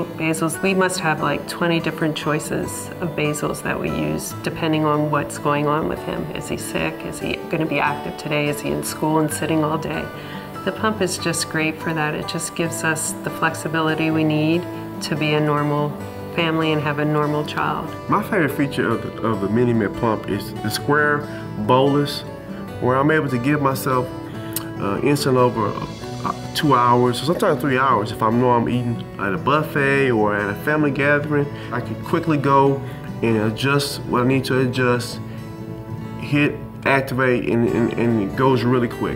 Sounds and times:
Music: 0:00.0 - 0:39.1.

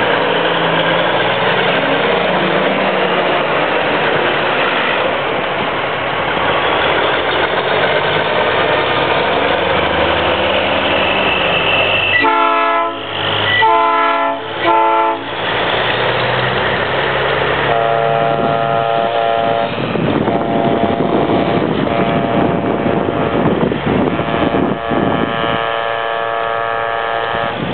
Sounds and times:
Truck: 0:00.0 - 0:27.7.

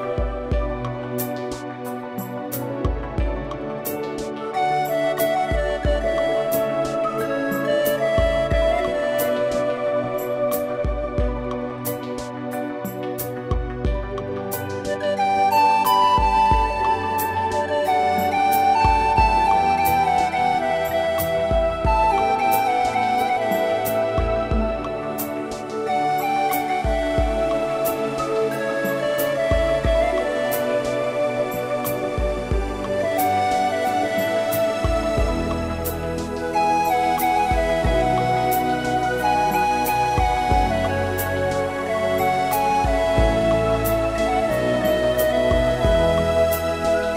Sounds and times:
Music: 0:00.0 - 0:47.1.

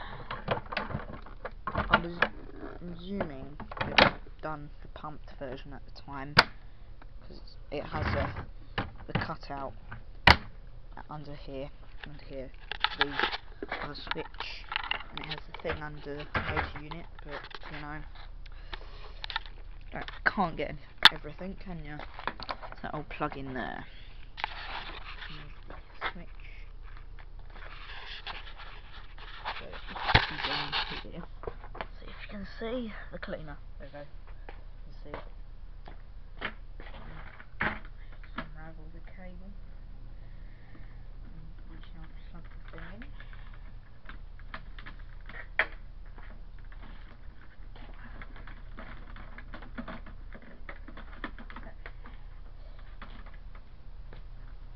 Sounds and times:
Speech: 0:01.9 - 0:06.4, 0:07.3 - 0:08.4, 0:09.1 - 0:09.8, 0:11.0 - 0:18.1, 0:19.9 - 0:22.1, 0:22.8 - 0:23.9, 0:29.5 - 0:31.3, 0:38.3 - 0:39.6, 0:41.3 - 0:43.1.

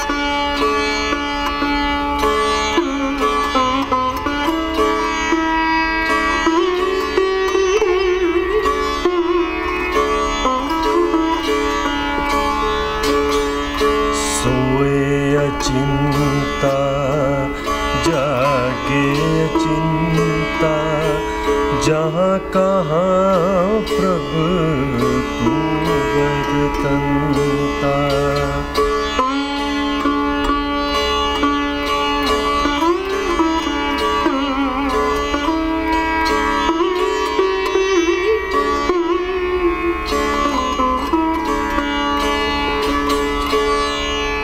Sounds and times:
Sitar: 0:00.0 - 0:44.4.

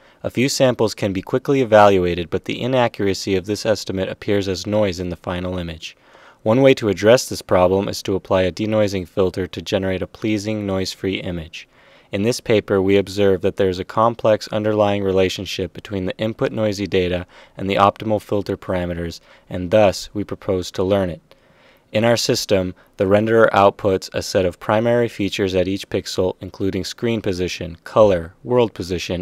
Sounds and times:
Speech: 0:00.2 - 0:21.3, 0:21.9 - 0:29.2.

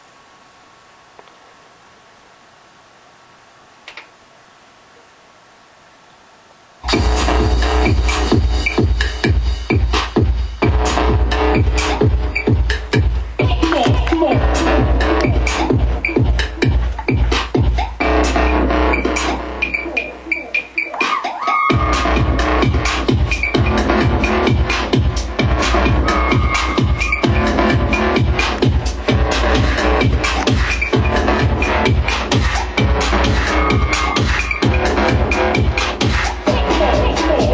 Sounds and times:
Music: 0:06.8 - 0:37.5.

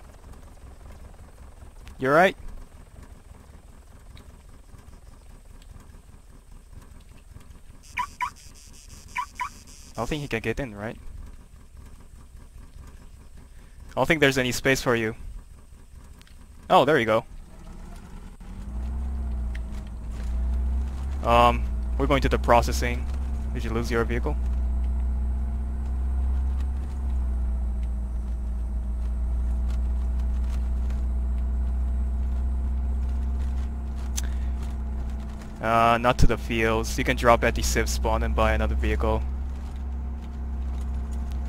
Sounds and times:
Outside, rural or natural: 0:00.0 - 0:41.4
Vehicle: 0:00.0 - 0:41.4
Speech: 0:02.0 - 0:02.4, 0:10.0 - 0:11.0, 0:14.0 - 0:15.2, 0:16.7 - 0:17.3, 0:21.2 - 0:24.4, 0:35.6 - 0:39.2.

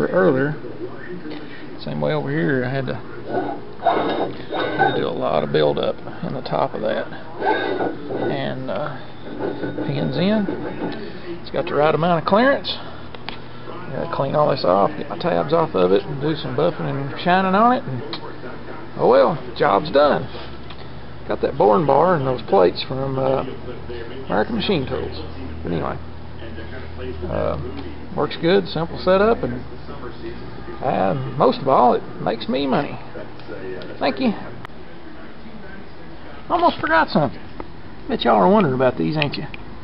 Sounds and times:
Speech: 0:00.0 - 0:03.3, 0:04.7 - 0:07.4, 0:08.2 - 0:09.1, 0:09.8 - 0:13.0, 0:13.7 - 0:20.4, 0:21.2 - 0:39.6.

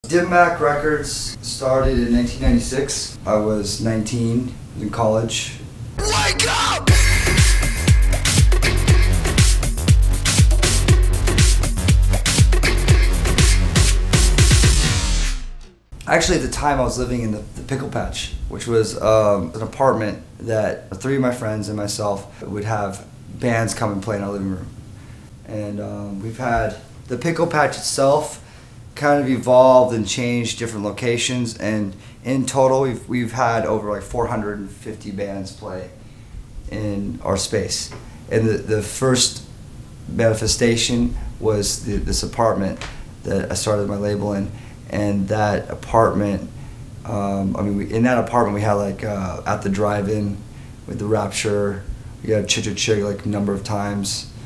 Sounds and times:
House music: 0:06.0 - 0:15.3.

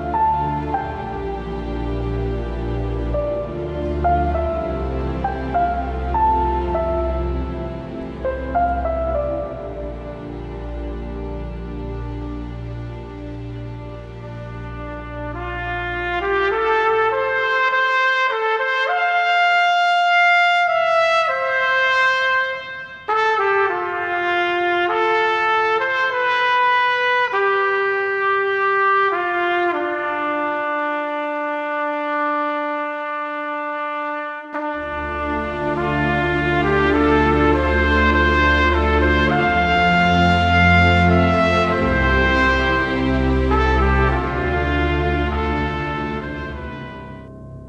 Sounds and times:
Trumpet: 0:00.0 - 0:47.6.

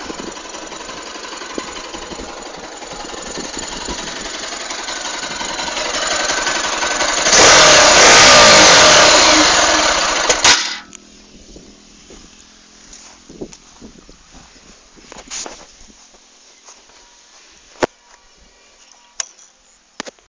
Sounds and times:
Motorcycle: 0:00.0 - 0:13.3
Engine: 0:00.0 - 0:15.7.

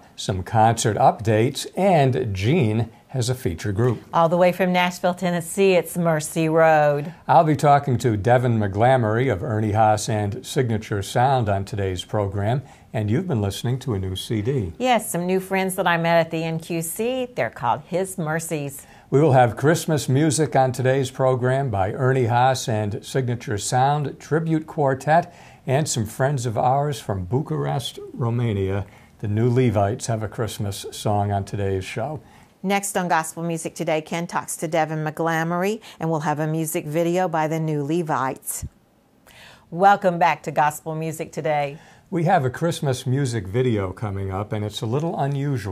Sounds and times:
Speech: 0:00.2 - 0:38.7, 0:39.8 - 0:45.7.

